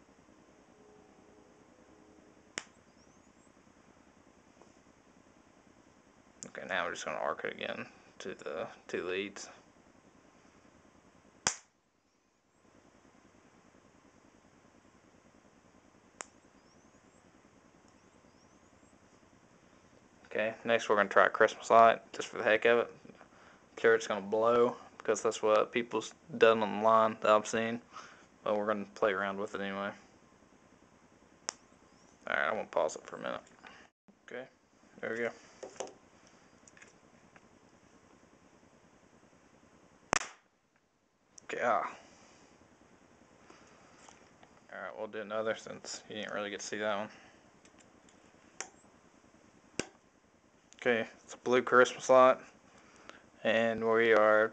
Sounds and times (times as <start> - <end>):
Speech: 6.4 - 9.6, 20.3 - 23.0, 23.8 - 27.8, 28.4 - 30.0, 32.2 - 33.5, 34.3 - 35.4, 41.4 - 42.0, 44.7 - 47.2, 50.8 - 52.4, 53.4 - 54.5.